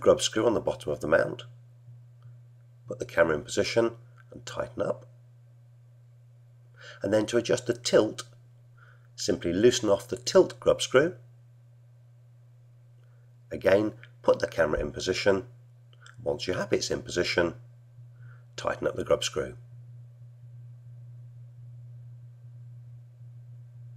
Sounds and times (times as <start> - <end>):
Speech: 0.0 - 1.6, 2.9 - 5.1, 7.0 - 8.4, 9.2 - 11.2, 13.5 - 15.6, 16.2 - 17.6, 18.6 - 19.6.